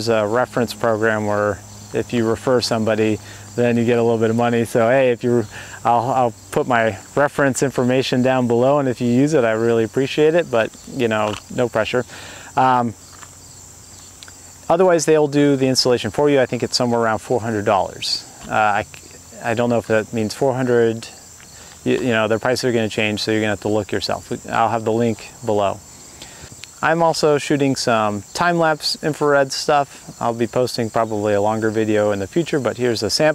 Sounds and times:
Cricket: 0.0 - 33.3.

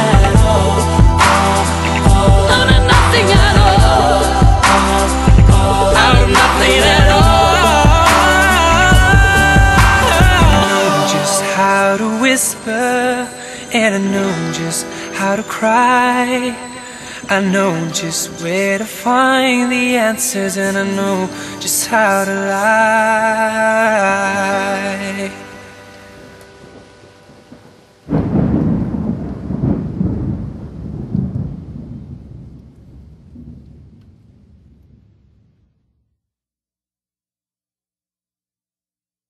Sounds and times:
Thunderstorm: 26.2 - 35.8.

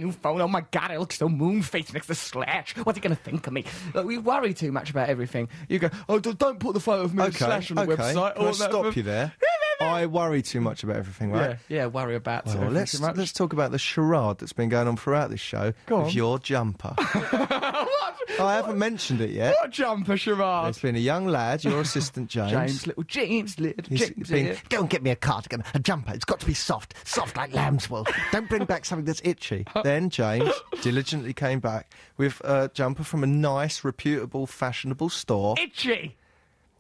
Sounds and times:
Speech: 0.0 - 17.0, 17.9 - 36.2.

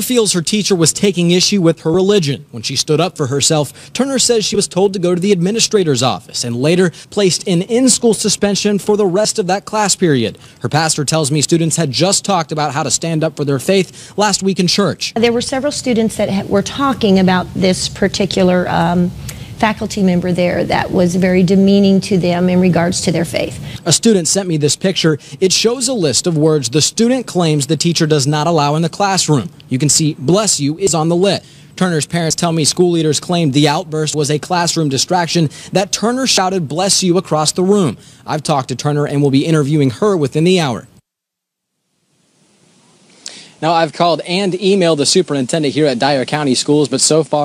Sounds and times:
Speech: 0.0 - 40.9, 43.6 - 47.4.

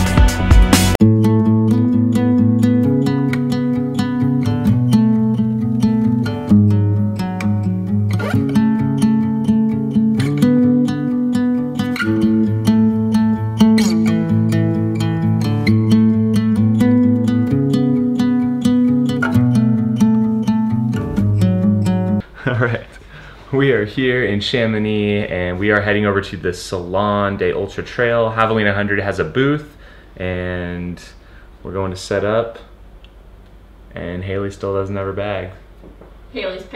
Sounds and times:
Music: 0.0 - 22.2.

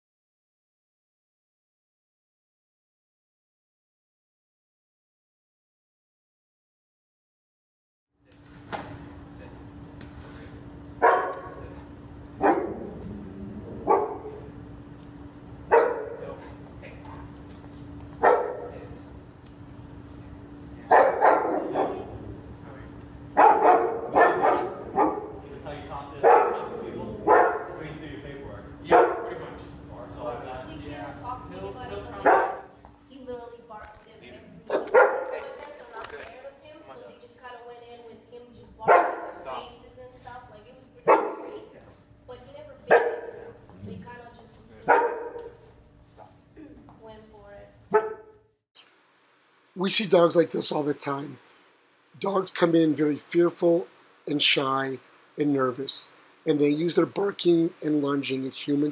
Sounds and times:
Bow-wow: 11.0 - 11.6, 12.4 - 14.5, 15.7 - 16.2, 18.2 - 18.8, 20.9 - 22.2, 23.4 - 25.4, 26.2 - 27.8, 28.9 - 29.4, 32.2 - 32.7, 34.7 - 35.5, 38.9 - 39.4, 41.0 - 41.7, 42.9 - 44.0, 44.9 - 45.6, 47.9 - 48.4.

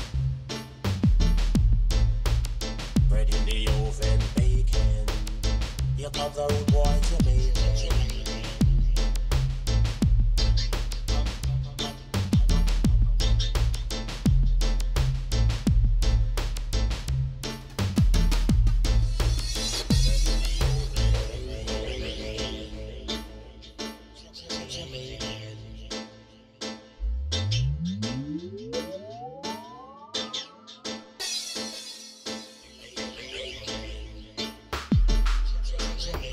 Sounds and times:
Music: 0.0 - 36.3.

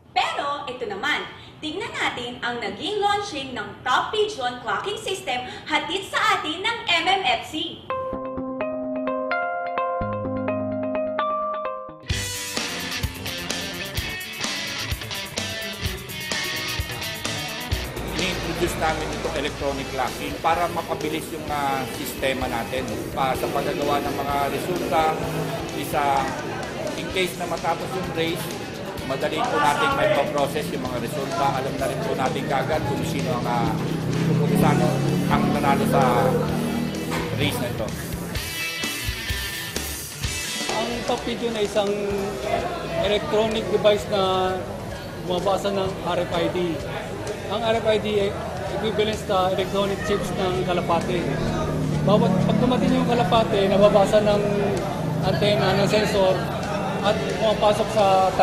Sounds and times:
Inside, public space: 0.0 - 8.1, 12.1 - 58.4
Music: 7.8 - 58.4
Speech: 18.1 - 33.8, 34.5 - 36.6, 37.3 - 38.0, 40.7 - 58.4.

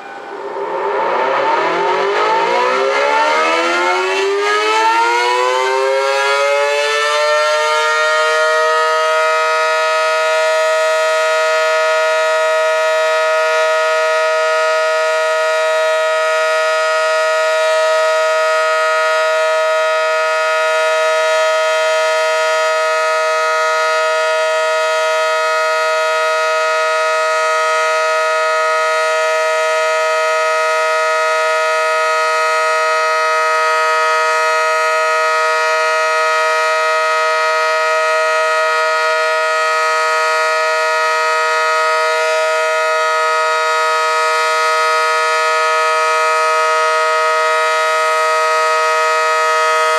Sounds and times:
Air horn, truck horn: 0.0 - 49.9.

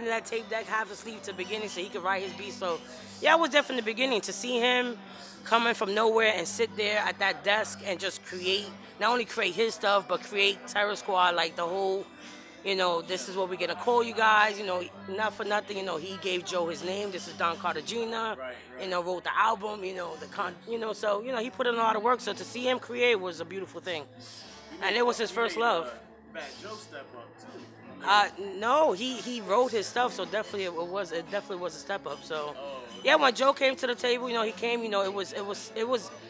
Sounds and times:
Speech: 0.0 - 12.0, 12.7 - 24.0, 24.8 - 36.3
Music: 0.0 - 36.3.

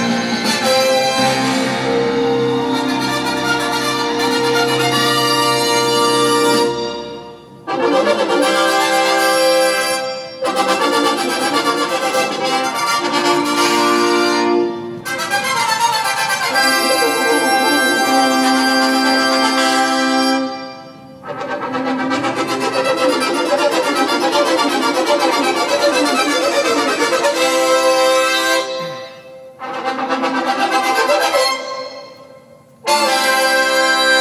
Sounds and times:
Music: 0.0 - 34.2.

